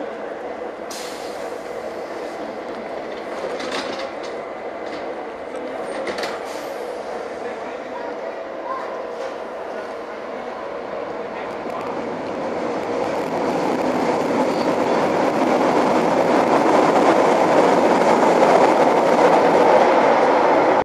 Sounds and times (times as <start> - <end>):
Subway, metro, underground: 0.0 - 20.8
Train: 0.0 - 20.8.